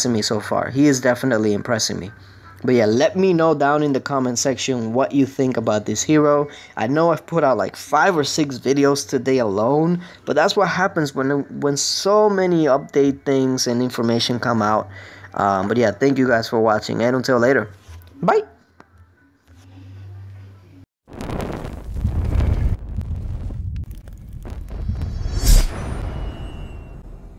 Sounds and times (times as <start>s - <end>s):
Speech: 0.0s - 18.6s.